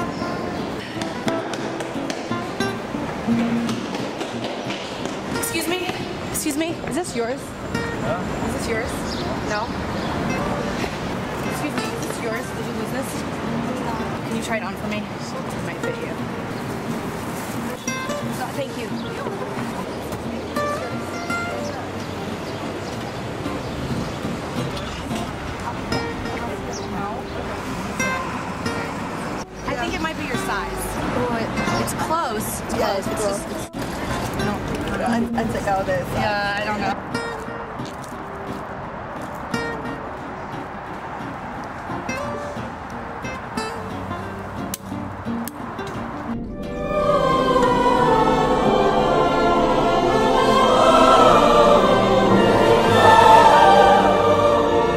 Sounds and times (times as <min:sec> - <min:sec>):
Music: 0:00.0 - 0:09.6, 0:10.3 - 0:27.3, 0:28.0 - 0:54.9.